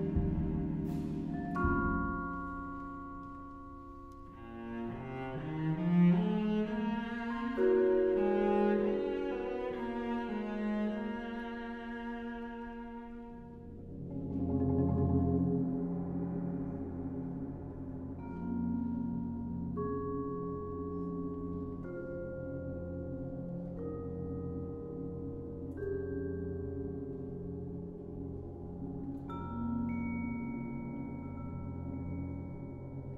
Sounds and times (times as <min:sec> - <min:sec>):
Classical music: 0:00.0 - 0:31.7
Cello: 0:00.0 - 0:33.1
Orchestra: 0:00.0 - 0:33.1.